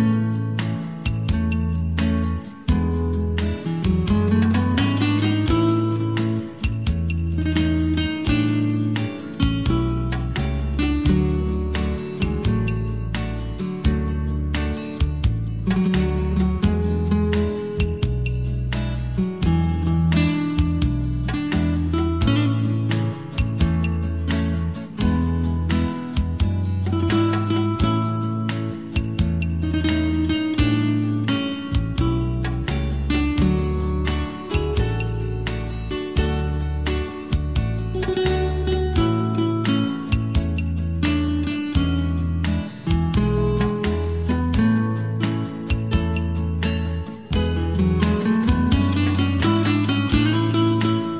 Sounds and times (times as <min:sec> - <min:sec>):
Bass guitar: 0:00.0 - 0:51.1
Electric guitar: 0:00.0 - 0:51.1.